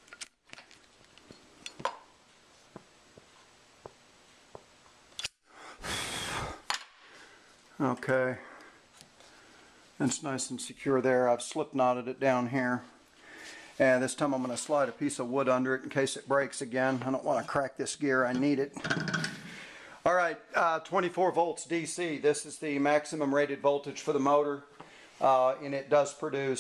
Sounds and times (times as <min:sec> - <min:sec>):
Speech: 0:07.8 - 0:08.6, 0:10.0 - 0:13.0, 0:13.8 - 0:18.8, 0:20.0 - 0:26.6.